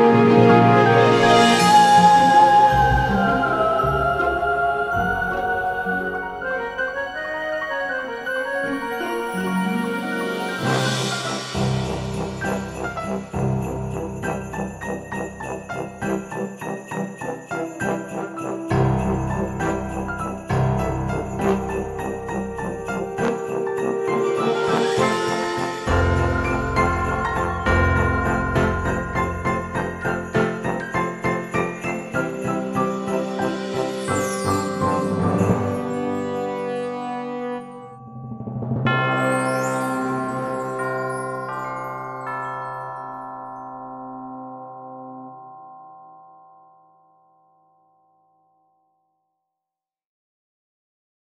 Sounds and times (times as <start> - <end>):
Chime: 8.7 - 49.3.